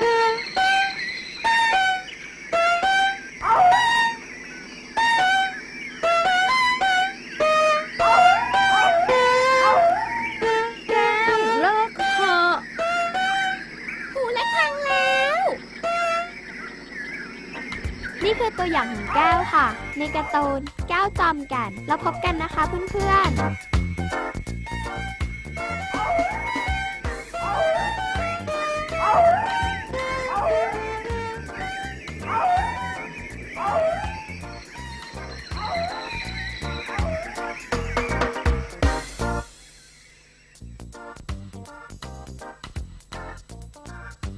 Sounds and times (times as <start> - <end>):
Speech: 10.9 - 12.6, 18.2 - 23.4.